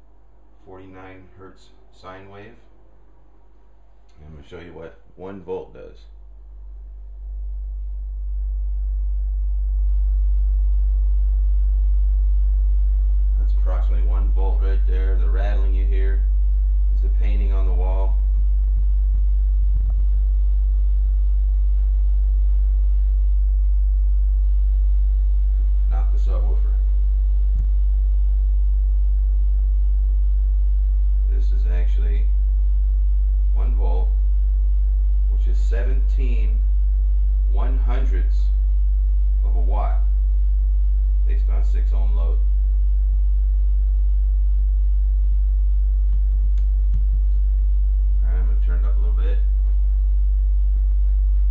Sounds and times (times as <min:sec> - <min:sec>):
Inside, small room: 0:00.0 - 0:51.5
Speech: 0:00.6 - 0:02.7, 0:04.1 - 0:06.1, 0:13.4 - 0:16.3, 0:17.0 - 0:18.2, 0:25.9 - 0:26.9, 0:31.3 - 0:32.3, 0:33.6 - 0:34.2, 0:35.3 - 0:36.7, 0:37.5 - 0:38.6, 0:39.4 - 0:40.1, 0:41.2 - 0:42.5, 0:48.2 - 0:49.5.